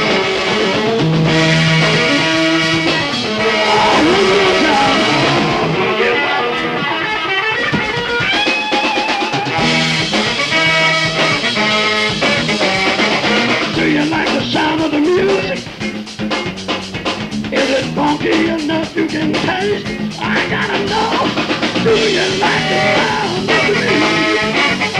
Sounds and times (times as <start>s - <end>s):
Music: 0.0s - 24.9s.